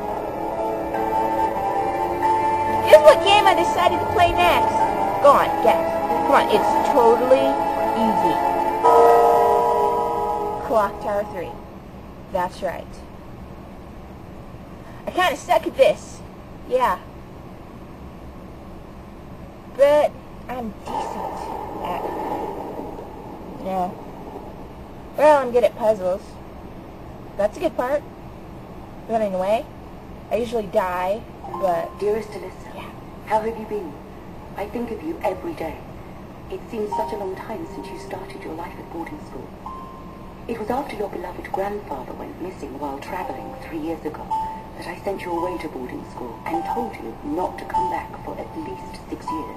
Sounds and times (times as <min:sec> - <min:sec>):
Speech: 0:02.8 - 0:08.4, 0:10.6 - 0:11.6, 0:12.3 - 0:13.1, 0:15.0 - 0:17.1, 0:19.8 - 0:22.2, 0:23.6 - 0:24.0, 0:25.2 - 0:26.4, 0:27.4 - 0:28.1, 0:29.1 - 0:29.7, 0:30.3 - 0:34.0, 0:34.6 - 0:35.8, 0:36.5 - 0:39.5, 0:40.5 - 0:49.5.